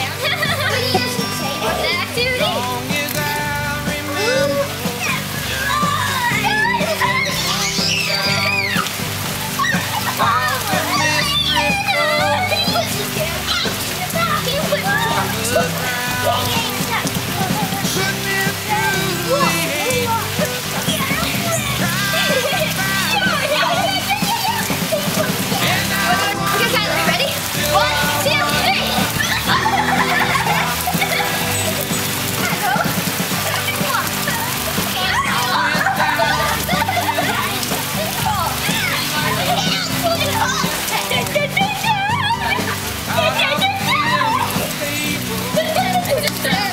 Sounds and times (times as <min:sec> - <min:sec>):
Child speech, kid speaking: 0:00.0 - 0:03.3, 0:04.0 - 0:08.9, 0:09.5 - 0:46.7
Music: 0:00.0 - 0:46.7
Rain: 0:00.0 - 0:46.7.